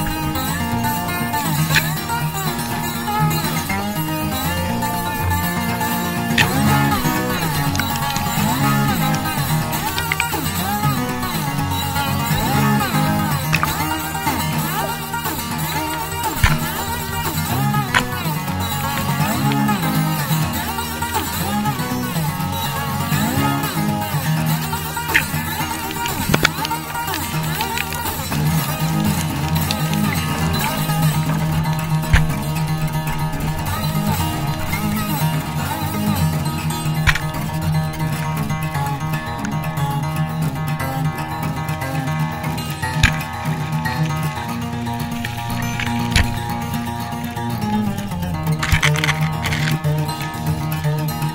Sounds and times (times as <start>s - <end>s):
Zither: 0.0s - 51.3s.